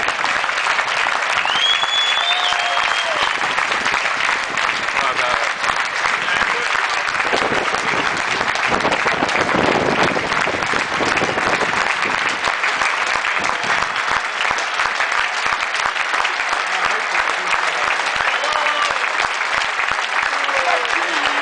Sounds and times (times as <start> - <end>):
Speech: 5.0 - 6.8, 16.6 - 19.0, 20.3 - 21.4.